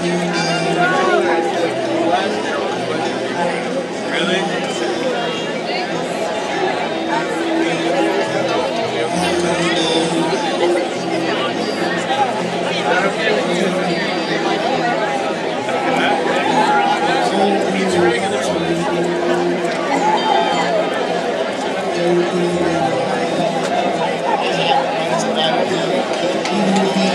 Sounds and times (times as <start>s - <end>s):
Speech: 0.0s - 27.1s.